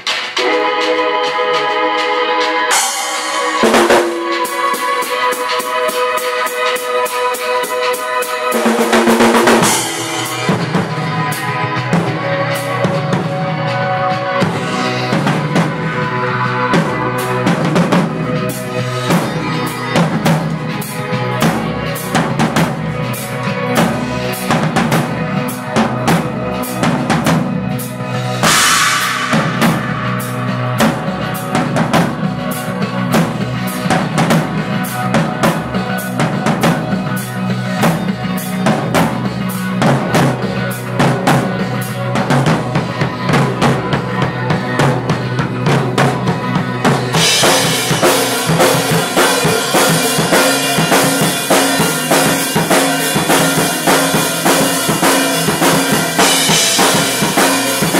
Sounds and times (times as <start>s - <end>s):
Drum: 0.0s - 57.9s
Drum kit: 0.0s - 57.9s.